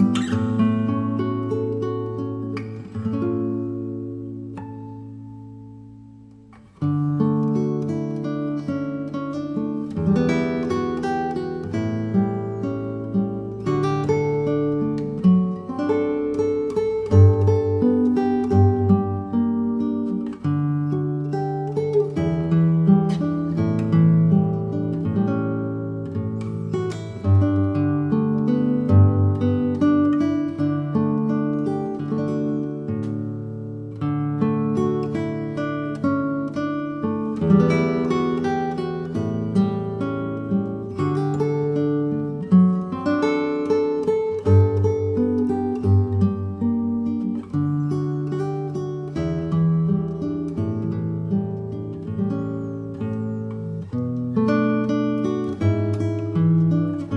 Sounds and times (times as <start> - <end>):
Acoustic guitar: 0.0 - 57.1
Blues: 0.0 - 57.1.